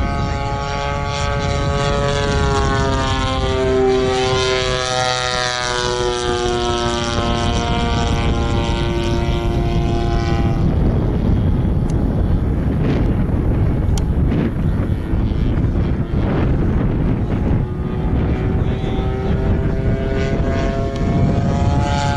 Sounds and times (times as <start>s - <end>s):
Aircraft: 0.0s - 22.1s.